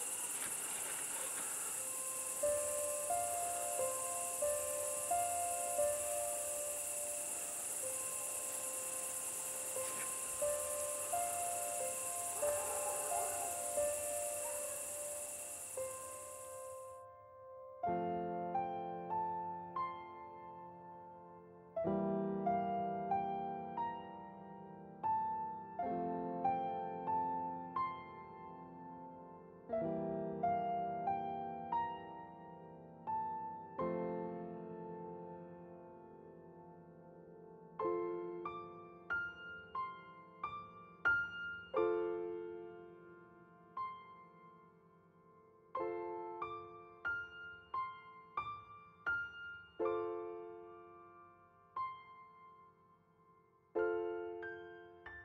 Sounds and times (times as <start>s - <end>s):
Music: 0.0s - 55.2s.